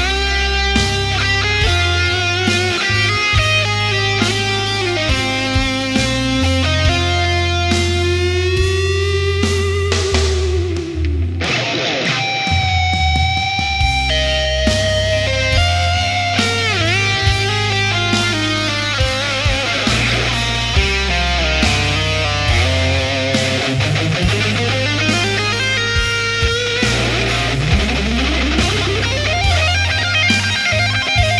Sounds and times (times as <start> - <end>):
Electric guitar: 0.0 - 31.3.